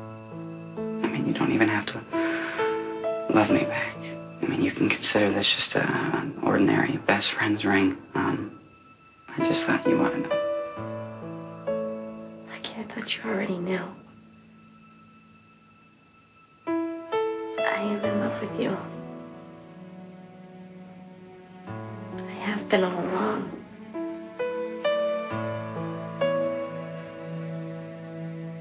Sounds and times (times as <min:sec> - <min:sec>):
Music: 0:00.0 - 0:28.6
Speech: 0:17.6 - 0:18.9, 0:22.2 - 0:23.6.